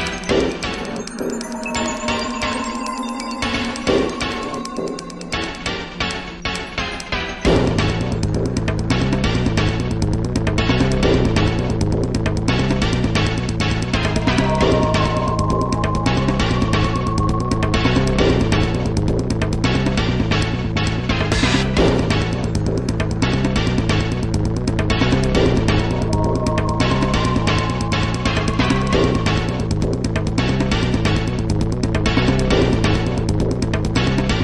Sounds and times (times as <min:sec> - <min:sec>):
Video game music: 0:00.0 - 0:34.4.